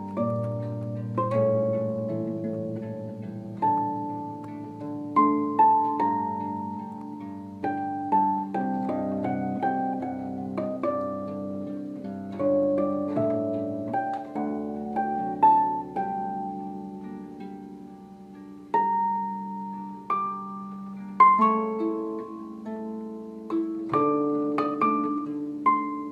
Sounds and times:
Harp: 0.0s - 26.1s.

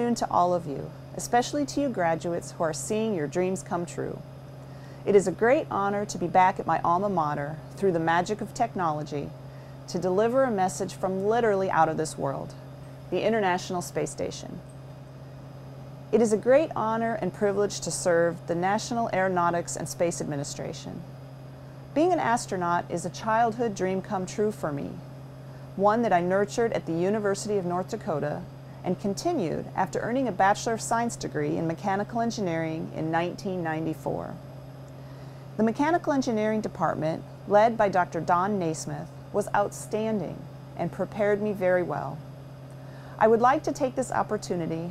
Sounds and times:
Female speech, woman speaking: 0.0s - 4.2s, 5.1s - 9.3s, 9.9s - 14.6s, 16.2s - 21.0s, 22.0s - 25.0s, 25.8s - 34.4s, 35.6s - 42.2s, 43.2s - 44.9s
Narration, monologue: 0.0s - 44.9s.

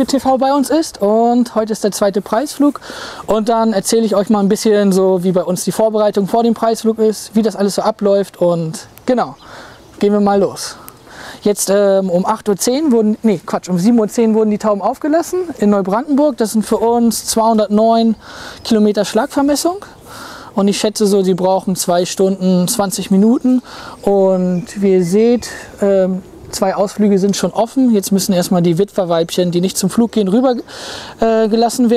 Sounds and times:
Speech: 0.0s - 9.4s, 10.0s - 20.0s, 20.6s - 31.9s
Outside, urban or manmade: 0.0s - 31.9s
Bird: 8.4s - 13.1s, 13.8s - 31.9s.

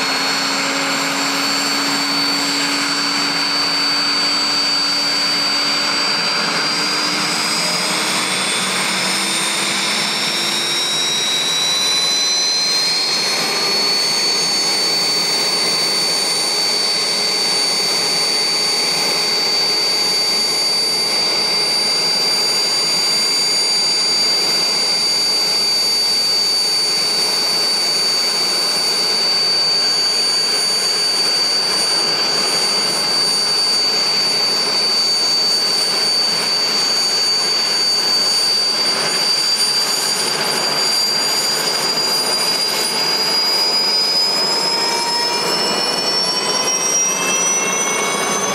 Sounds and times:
Helicopter: 0.0s - 48.5s.

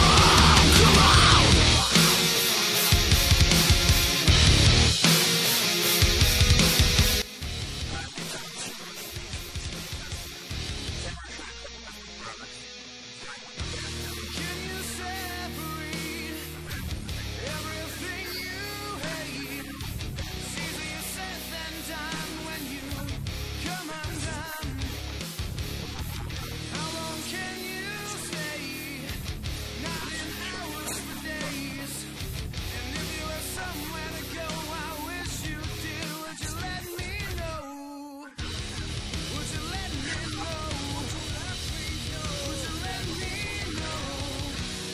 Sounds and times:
Music: 0.0s - 44.9s
Speech: 7.7s - 25.1s, 25.8s - 44.6s.

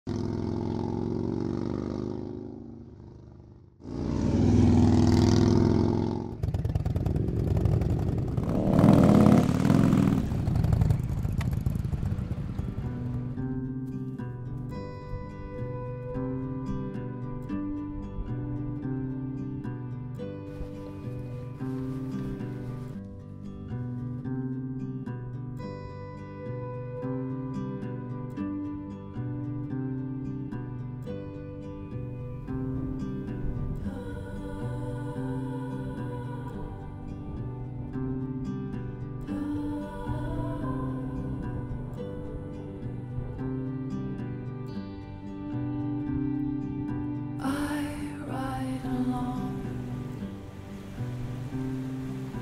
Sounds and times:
Outside, rural or natural: 0.0s - 52.4s.

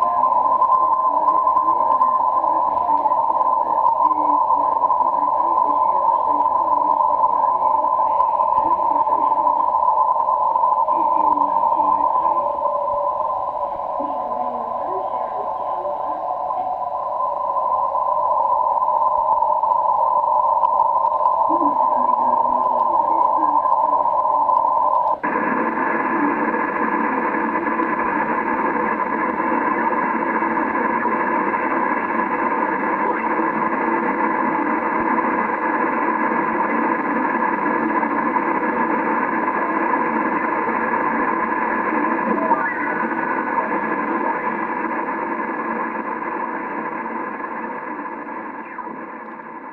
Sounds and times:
Radio: 0.0s - 49.7s.

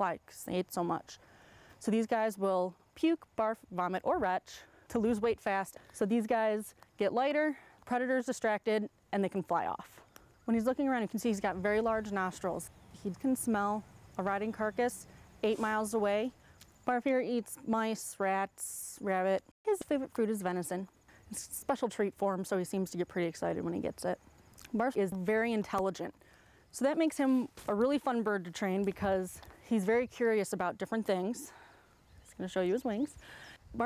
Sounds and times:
Speech: 0.0s - 1.2s, 1.8s - 16.3s, 16.9s - 26.1s, 26.8s - 31.6s, 32.4s - 33.2s.

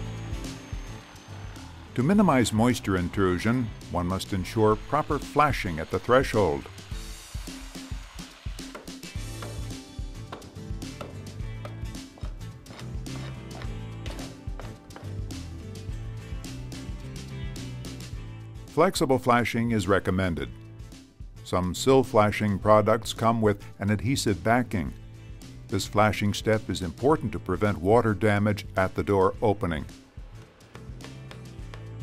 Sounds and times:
Music: 0.0s - 32.0s.

